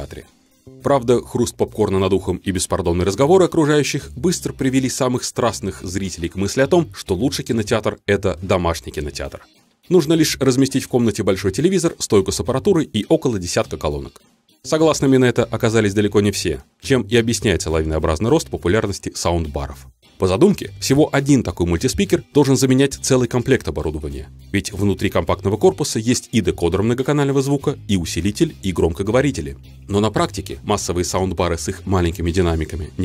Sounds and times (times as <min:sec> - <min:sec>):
Music: 0:00.0 - 0:33.0
Speech: 0:00.0 - 0:33.0.